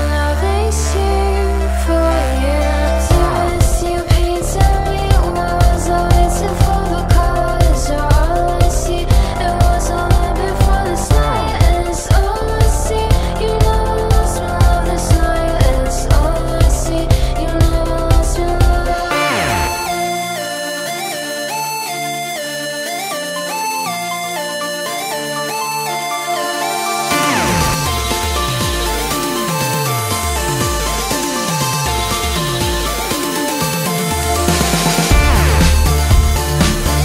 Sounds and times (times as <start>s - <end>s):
Music: 0.0s - 37.0s.